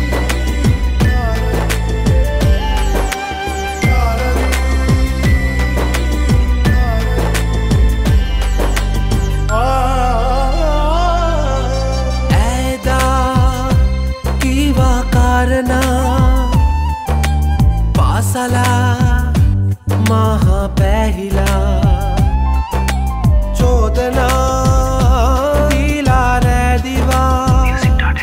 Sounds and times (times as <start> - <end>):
Music: 0.0 - 28.2.